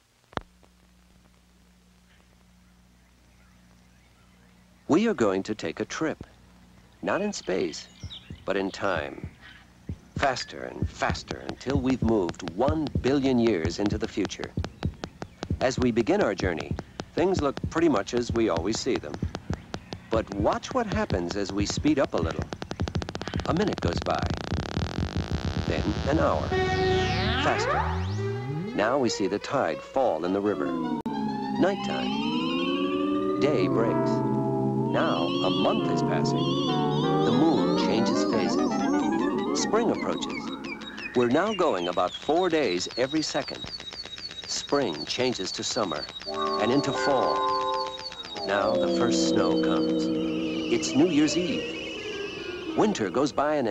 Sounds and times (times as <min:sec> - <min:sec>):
Speech: 0:04.9 - 0:06.3, 0:07.0 - 0:07.9, 0:08.5 - 0:09.3, 0:10.2 - 0:14.6, 0:15.6 - 0:19.3, 0:20.1 - 0:22.5, 0:23.5 - 0:24.4, 0:25.7 - 0:26.5, 0:27.3 - 0:27.8, 0:28.7 - 0:30.8, 0:31.6 - 0:32.2, 0:33.4 - 0:34.2, 0:35.0 - 0:36.5, 0:37.3 - 0:40.5, 0:41.2 - 0:43.6, 0:44.5 - 0:47.4, 0:48.4 - 0:50.1, 0:50.7 - 0:51.6, 0:52.8 - 0:53.7
Music: 0:25.8 - 0:29.4, 0:30.2 - 0:41.3, 0:46.2 - 0:53.2.